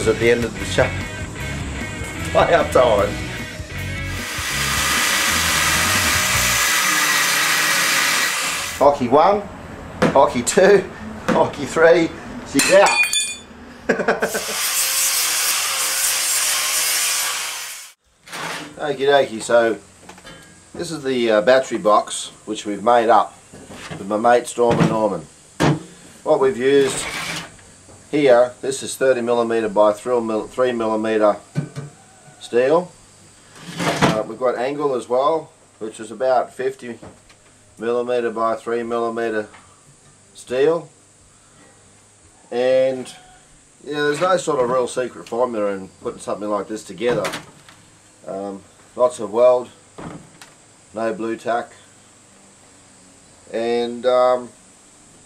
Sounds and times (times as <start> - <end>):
Speech: 0.0 - 1.0, 2.4 - 3.2, 8.8 - 9.5, 10.1 - 13.0, 18.8 - 19.8, 20.8 - 25.3, 26.3 - 27.1, 28.1 - 31.4, 32.4 - 32.9, 34.0 - 37.0, 37.8 - 39.6, 40.4 - 41.0, 42.5 - 47.4, 48.2 - 49.8, 50.9 - 51.9, 53.5 - 54.6
Music: 0.0 - 6.7.